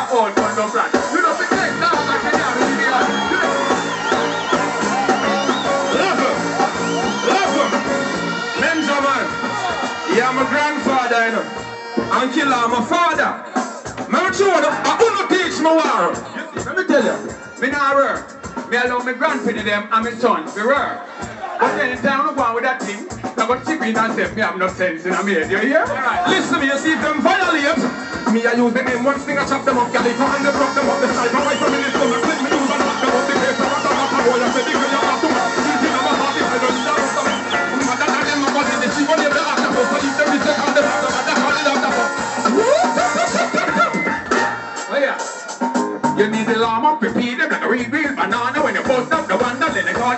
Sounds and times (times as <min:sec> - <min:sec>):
Singing: 0:00.0 - 0:10.3, 0:25.9 - 0:44.6
Music: 0:00.0 - 0:50.1
Speech: 0:08.6 - 0:09.3, 0:10.1 - 0:11.5, 0:12.1 - 0:13.5, 0:14.1 - 0:30.0, 0:44.9 - 0:45.2, 0:46.2 - 0:50.1.